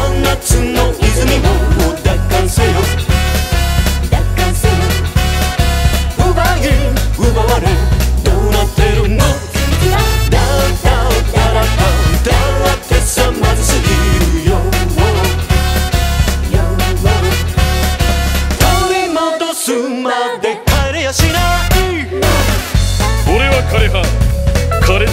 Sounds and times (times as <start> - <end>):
Music: 0.0 - 25.1.